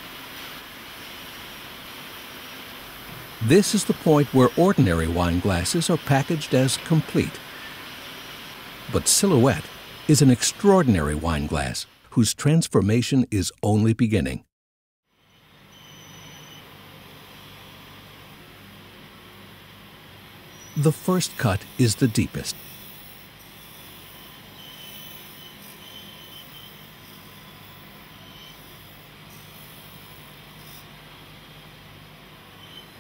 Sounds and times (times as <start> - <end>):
Speech: 3.4 - 7.4, 8.9 - 14.5, 20.8 - 22.6.